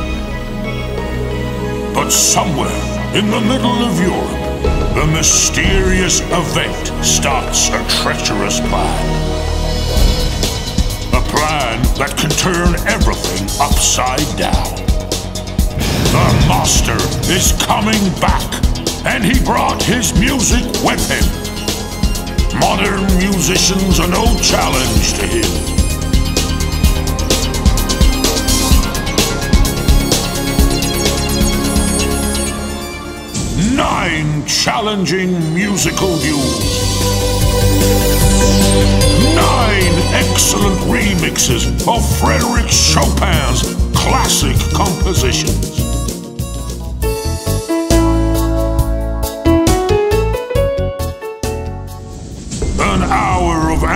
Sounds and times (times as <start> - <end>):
Music: 0.0 - 53.9
Speech: 2.0 - 9.2, 11.2 - 14.9, 16.1 - 21.4, 22.5 - 25.6, 33.6 - 36.7, 39.2 - 45.9, 52.7 - 53.9.